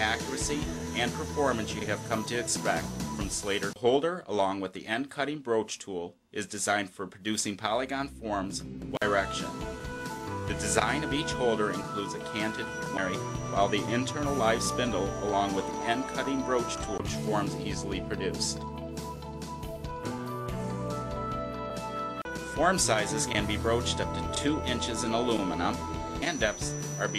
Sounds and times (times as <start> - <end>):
Music: 0.0 - 3.8, 7.9 - 27.1
Speech: 0.0 - 9.6, 10.5 - 18.6, 22.6 - 27.1.